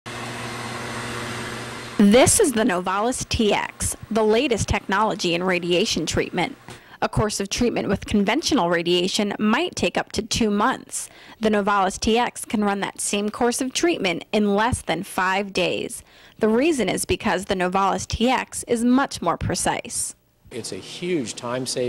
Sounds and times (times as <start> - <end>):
Speech: 2.0 - 21.8.